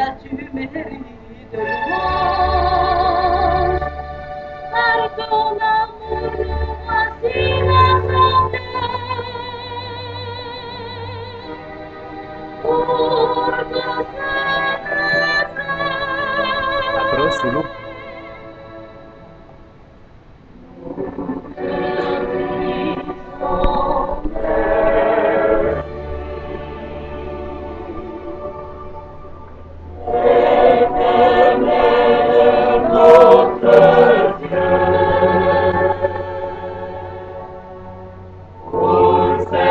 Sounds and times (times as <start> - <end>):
Music: 0.0 - 39.7
Speech: 17.0 - 17.7.